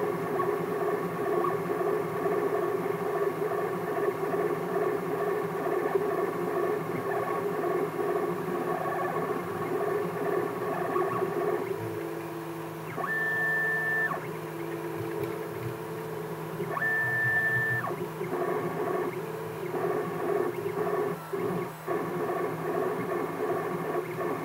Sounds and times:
Printer: 0.0 - 24.4.

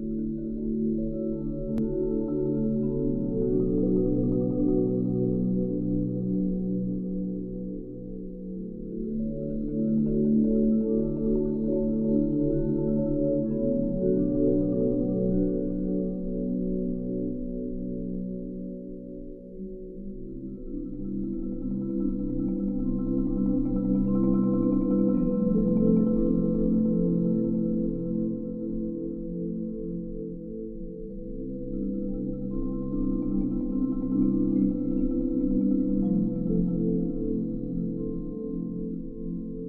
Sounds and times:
Marimba, xylophone: 0.0 - 39.6.

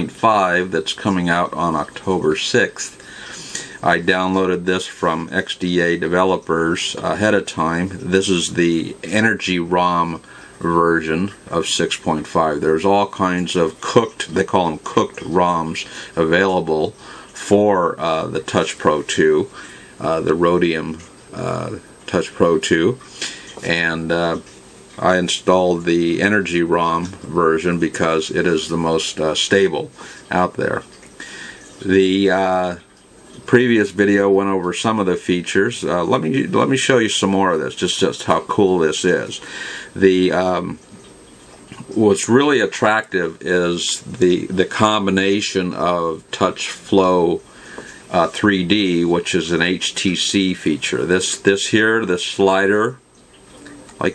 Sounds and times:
Speech: 0.0 - 3.0, 3.8 - 31.0, 31.8 - 41.0, 41.7 - 47.5, 48.1 - 53.0.

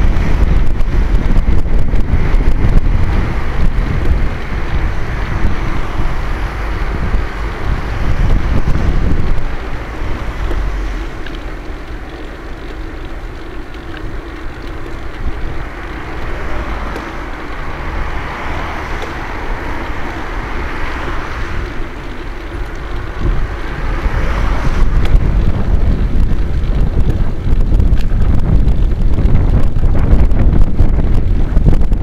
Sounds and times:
Car: 0.0 - 32.0.

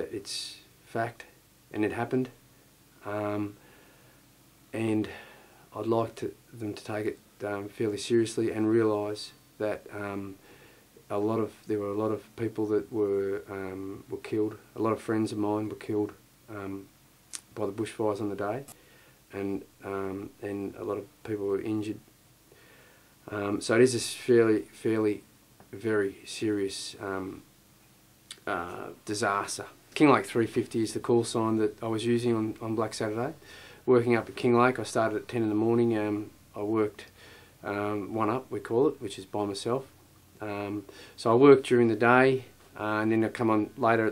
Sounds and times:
Speech: 0.0 - 2.4, 3.0 - 3.6, 4.7 - 10.4, 11.1 - 22.1, 23.3 - 27.5, 28.3 - 44.1.

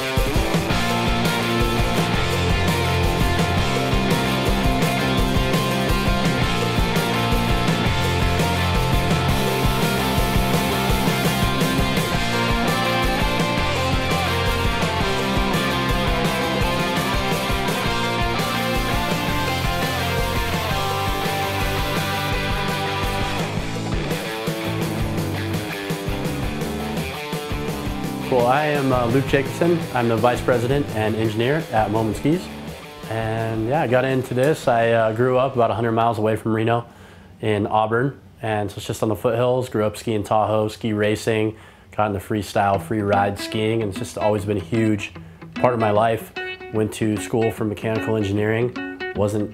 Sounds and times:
Music: 0.0 - 36.0, 42.6 - 49.5.

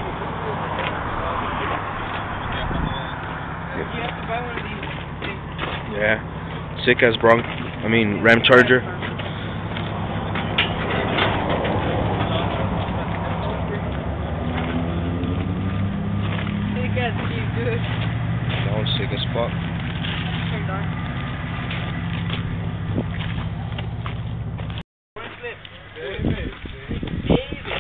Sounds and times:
Speech: 6.8 - 9.0, 18.7 - 19.6, 25.2 - 27.8.

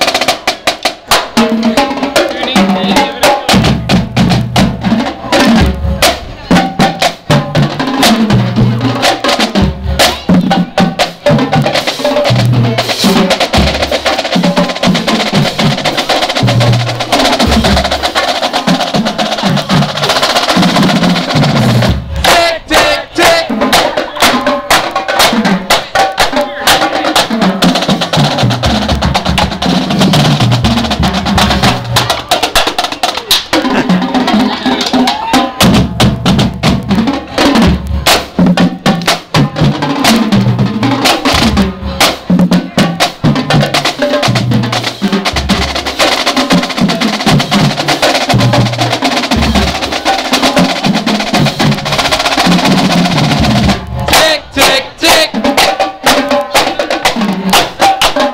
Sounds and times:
Music: 0.0 - 58.3
Speech: 1.6 - 3.7, 54.1 - 55.4.

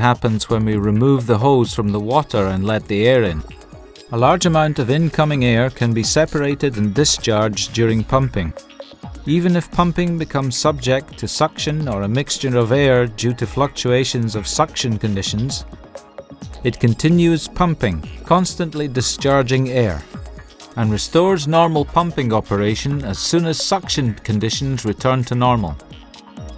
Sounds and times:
Speech: 0.0 - 3.5, 4.1 - 8.6, 9.3 - 15.6, 16.7 - 20.1, 20.8 - 25.8
Music: 0.0 - 26.5.

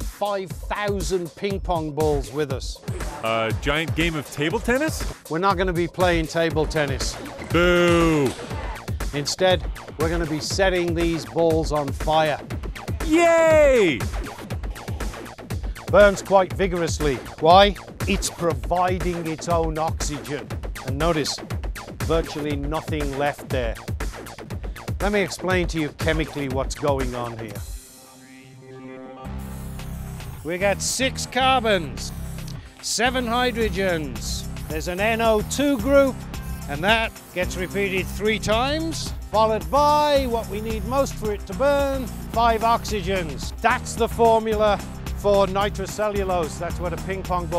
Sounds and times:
Music: 0.0 - 47.5
Speech: 0.2 - 8.3, 9.2 - 12.4, 13.0 - 14.1, 15.9 - 21.4, 22.0 - 23.8, 25.0 - 27.6, 30.5 - 32.1, 32.8 - 36.1, 36.7 - 47.5.

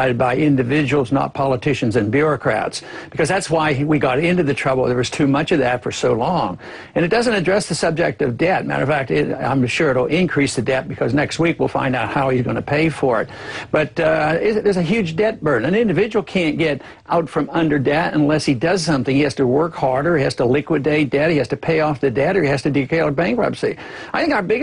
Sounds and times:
Speech: 0.0 - 24.6.

